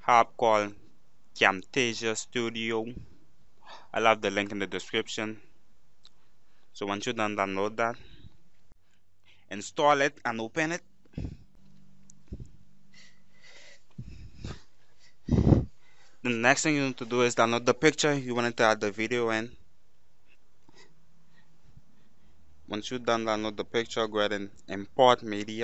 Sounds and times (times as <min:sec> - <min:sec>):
Speech: 0:00.0 - 0:00.8, 0:01.4 - 0:03.0, 0:03.9 - 0:05.4, 0:06.8 - 0:08.0, 0:09.5 - 0:10.8, 0:16.3 - 0:19.6, 0:22.7 - 0:25.6.